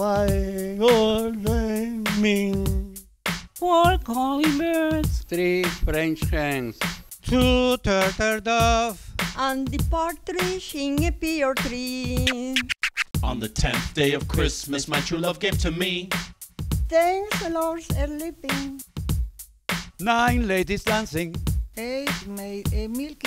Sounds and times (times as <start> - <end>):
Music: 0.0 - 23.2.